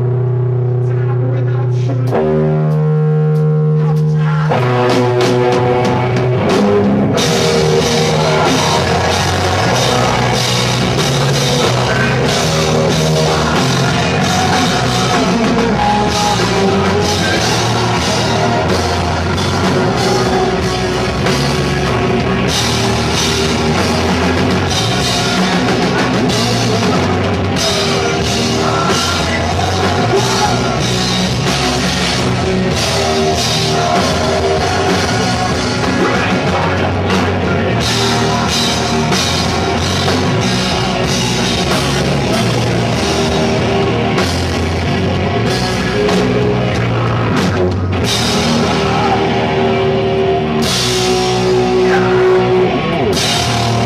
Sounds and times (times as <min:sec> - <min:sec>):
Drum kit: 0:00.0 - 0:53.8
Rock music: 0:00.0 - 0:53.8
Drum: 0:02.1 - 0:53.8.